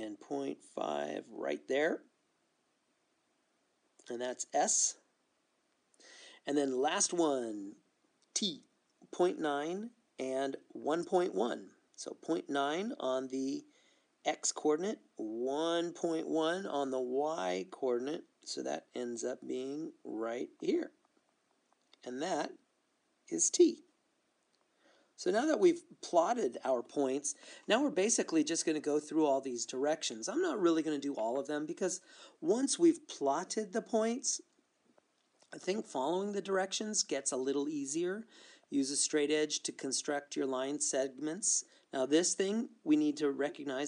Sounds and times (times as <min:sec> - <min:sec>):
Speech: 0:00.0 - 0:02.1, 0:04.0 - 0:05.1, 0:06.4 - 0:21.0, 0:22.0 - 0:22.6, 0:23.3 - 0:23.9, 0:25.2 - 0:34.5, 0:35.5 - 0:43.8.